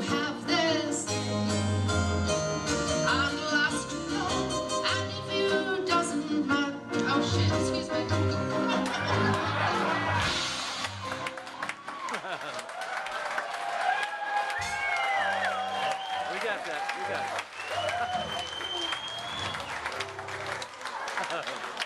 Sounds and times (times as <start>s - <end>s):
Music: 0.0s - 12.2s, 14.5s - 16.4s, 17.6s - 21.0s
Speech: 16.3s - 17.2s.